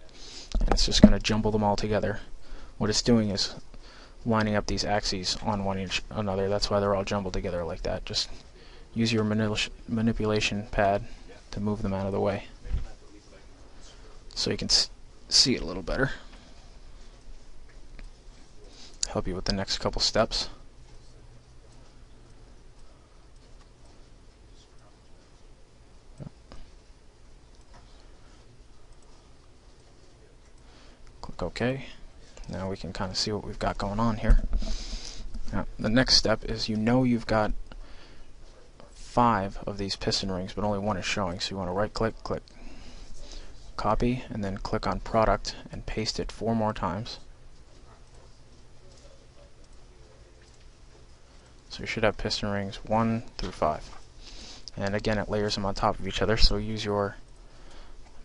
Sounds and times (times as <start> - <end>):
Speech: 0.0 - 3.6, 4.2 - 16.3, 18.6 - 21.4, 31.2 - 34.5, 35.5 - 37.6, 38.7 - 42.5, 43.8 - 47.3, 51.7 - 54.0, 54.7 - 57.2.